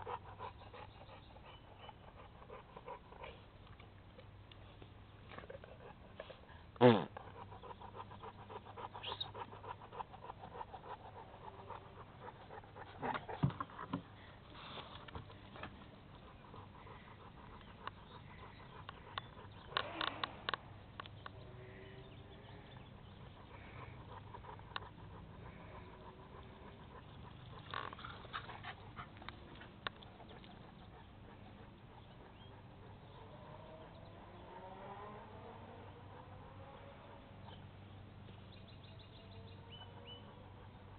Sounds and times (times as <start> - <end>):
Dog: 0.0 - 21.4, 22.3 - 38.4, 39.0 - 40.9.